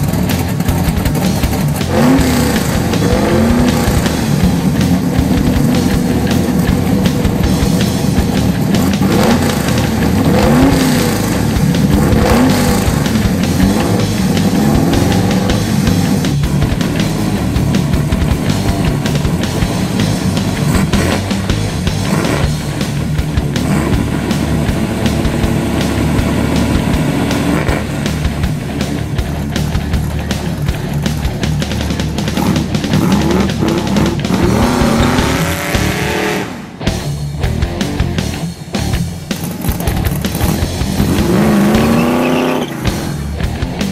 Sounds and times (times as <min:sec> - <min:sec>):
Music: 0:00.0 - 0:43.9.